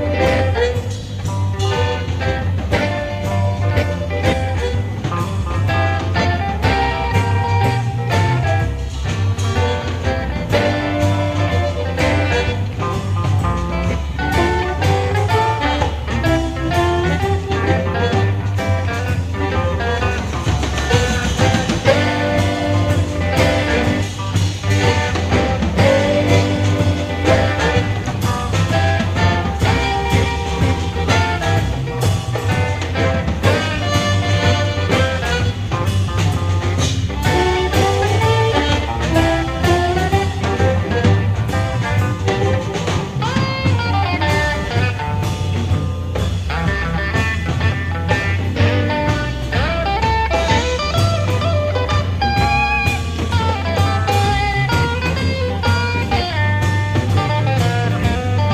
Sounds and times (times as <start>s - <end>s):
Blues: 0.0s - 58.5s.